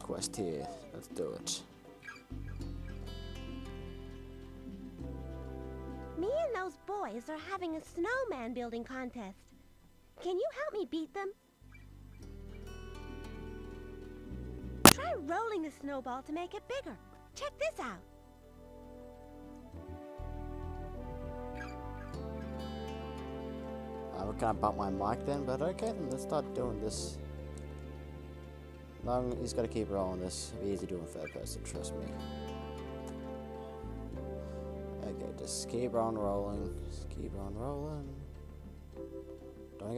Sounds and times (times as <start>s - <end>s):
Speech: 0.0s - 1.7s, 6.2s - 9.4s, 10.2s - 11.4s, 15.0s - 18.0s, 24.1s - 27.2s, 29.0s - 32.2s, 35.0s - 38.2s
Music: 0.0s - 39.9s.